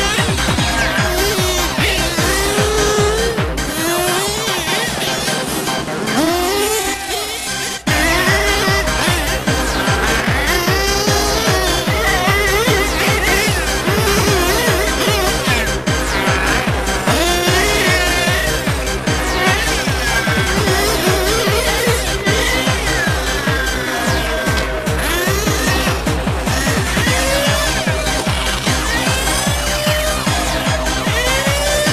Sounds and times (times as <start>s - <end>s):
Music: 0.0s - 31.9s
Vehicle: 0.0s - 31.9s
Accelerating, revving, vroom: 0.4s - 7.3s, 7.9s - 26.0s.